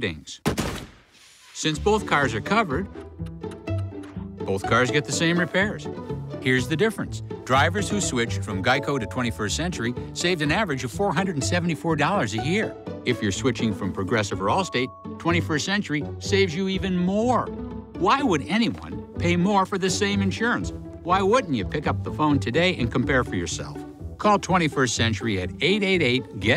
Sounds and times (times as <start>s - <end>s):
Speech: 0.0s - 0.4s, 1.6s - 2.9s, 4.4s - 26.5s
Music: 1.6s - 26.5s.